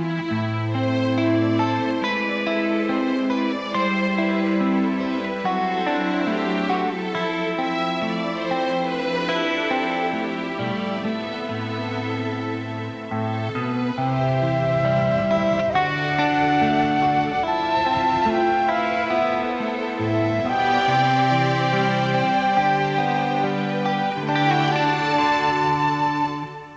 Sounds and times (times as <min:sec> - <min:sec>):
Violin, fiddle: 0:00.0 - 0:26.7.